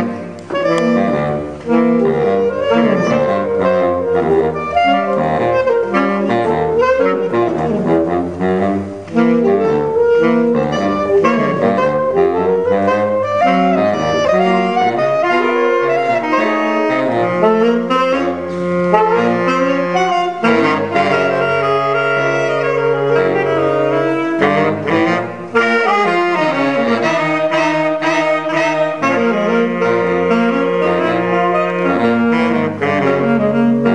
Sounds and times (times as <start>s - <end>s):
Brass instrument: 0.0s - 33.9s
Saxophone: 0.0s - 33.9s.